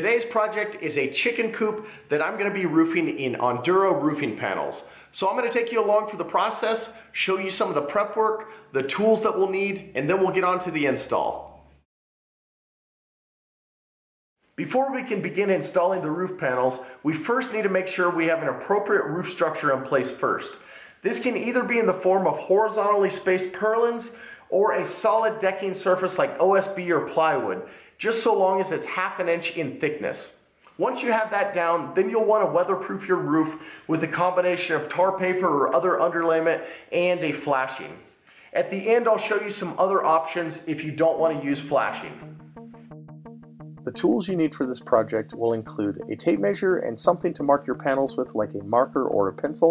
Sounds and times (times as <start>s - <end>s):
Speech: 0.0s - 11.5s, 14.6s - 42.2s, 43.9s - 49.7s.